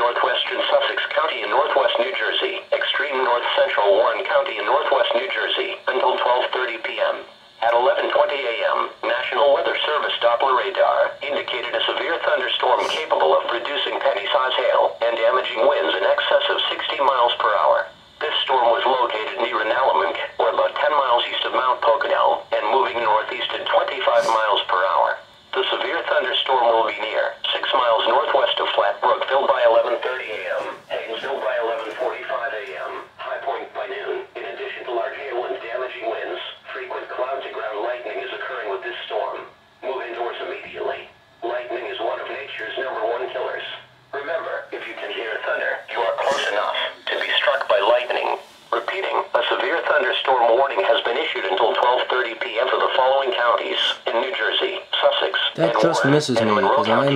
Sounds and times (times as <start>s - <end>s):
Radio: 0.0s - 57.1s
Speech: 0.0s - 57.1s.